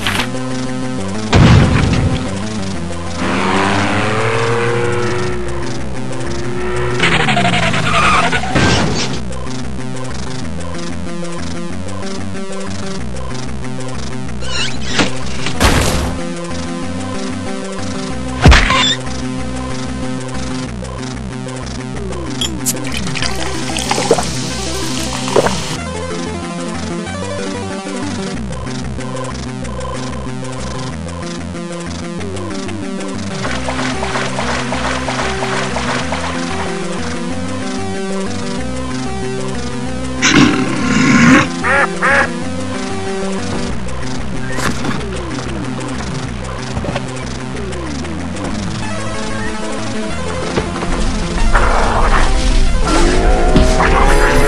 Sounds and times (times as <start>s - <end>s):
Music: 0.0s - 54.4s.